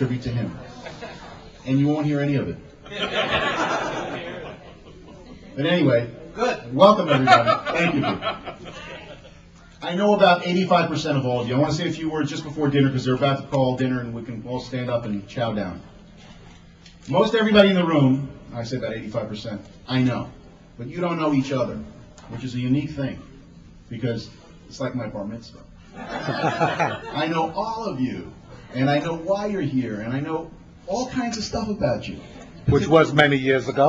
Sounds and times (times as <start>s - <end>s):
Male speech, man speaking: 0.0s - 0.7s, 1.6s - 2.6s, 5.6s - 8.2s, 9.8s - 15.8s, 17.1s - 23.3s, 23.9s - 25.7s, 27.2s - 33.8s
Narration, monologue: 0.0s - 0.9s, 9.4s - 33.8s.